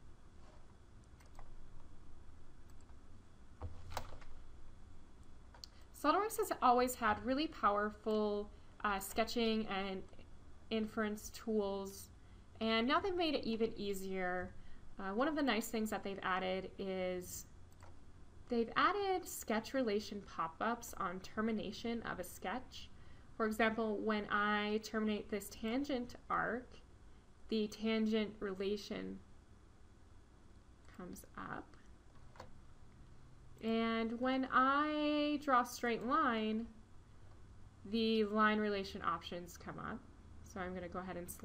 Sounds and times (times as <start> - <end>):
Speech: 6.0 - 17.5, 18.5 - 26.8, 27.5 - 29.2, 30.9 - 31.8, 33.6 - 36.7, 37.9 - 41.4.